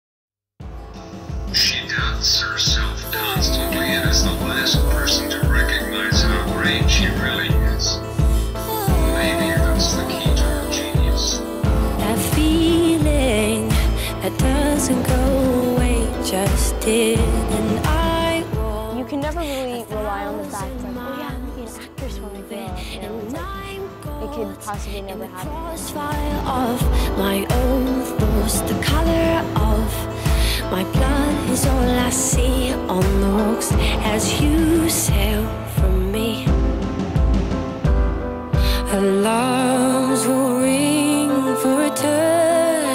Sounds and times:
Music: 0.6 - 42.9
Speech: 1.6 - 8.1, 18.0 - 26.7.

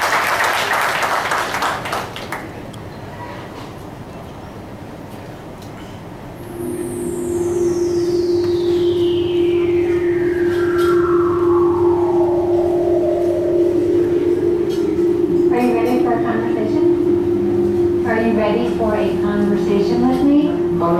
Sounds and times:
Music: 6.5 - 20.9.

